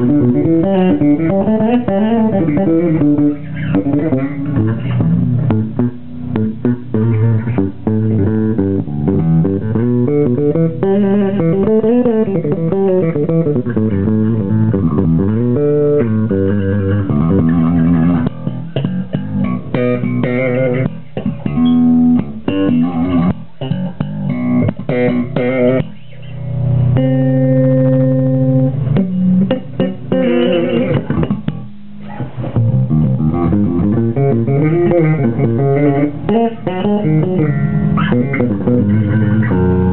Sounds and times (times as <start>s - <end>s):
Bass guitar: 0.0s - 39.9s.